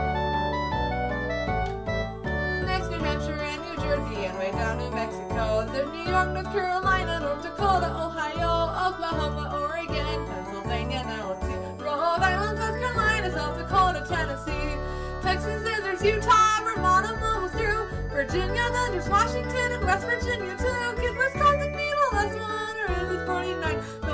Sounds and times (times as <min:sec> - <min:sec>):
Music: 0:00.0 - 0:24.1
Female singing: 0:02.8 - 0:24.1.